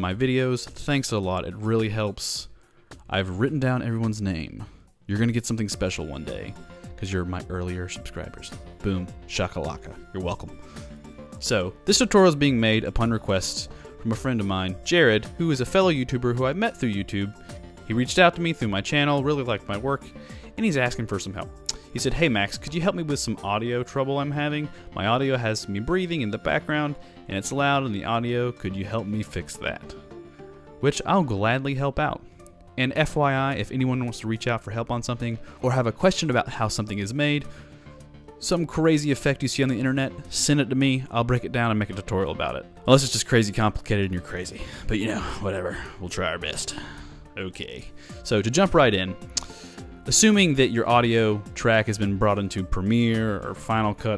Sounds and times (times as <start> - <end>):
Speech: 0.0 - 10.6, 11.4 - 30.0, 30.8 - 32.2, 32.8 - 37.5, 38.4 - 49.2, 50.1 - 54.1
Music: 0.0 - 54.1.